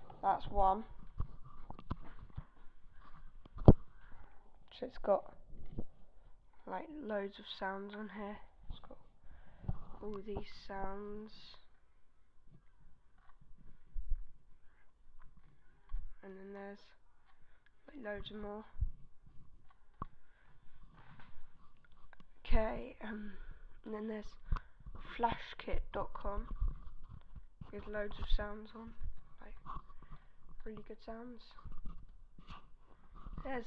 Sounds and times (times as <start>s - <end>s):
Speech: 0.2s - 0.9s, 4.7s - 5.4s, 6.6s - 9.0s, 10.0s - 11.7s, 16.2s - 17.0s, 17.9s - 18.8s, 22.4s - 24.4s, 25.0s - 26.5s, 27.7s - 29.6s, 30.6s - 31.7s, 33.4s - 33.6s.